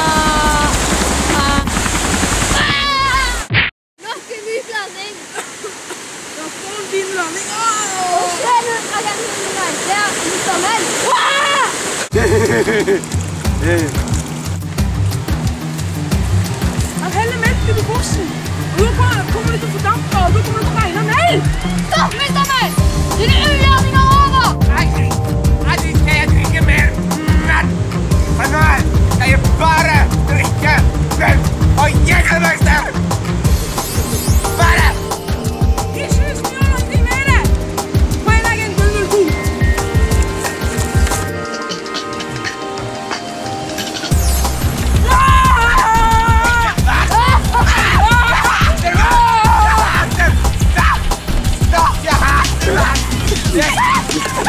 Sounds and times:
Stream: 0.0 - 54.4.

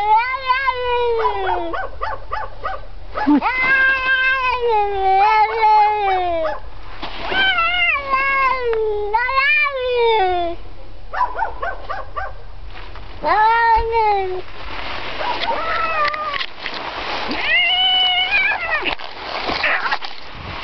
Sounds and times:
Meow: 0.0 - 1.7, 3.4 - 6.4, 13.2 - 14.2, 17.4 - 18.9.

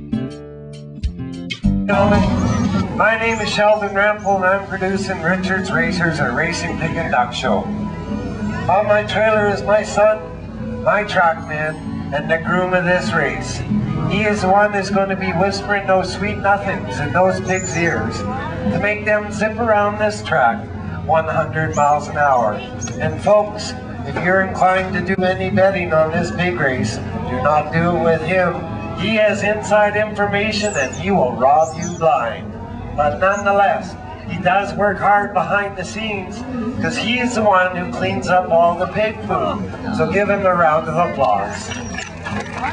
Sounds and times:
Music: 0.0 - 42.7
Speech: 1.9 - 7.7, 8.5 - 41.9.

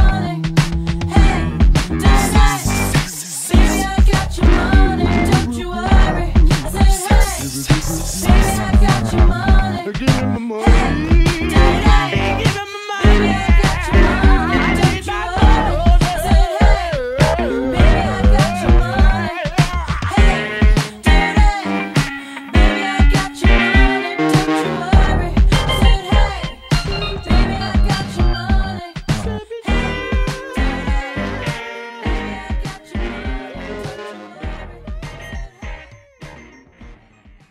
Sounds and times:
Funk: 0.0 - 37.5.

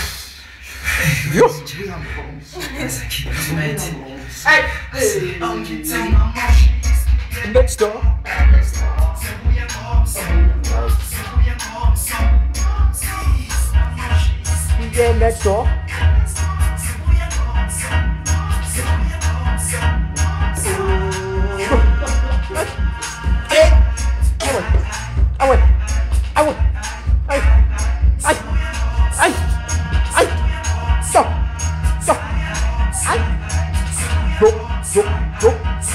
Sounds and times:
Music: 3.0 - 35.9.

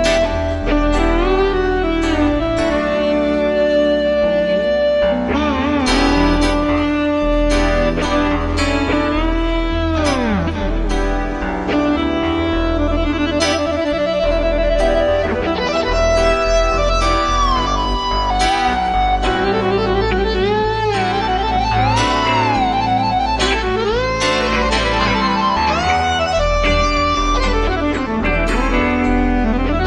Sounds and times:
Steel guitar, slide guitar: 0.0 - 29.8.

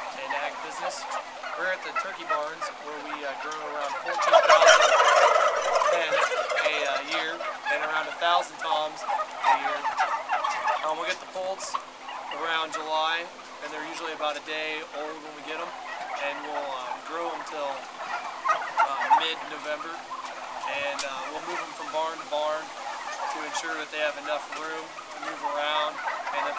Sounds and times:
Gobble: 0.0 - 26.5.

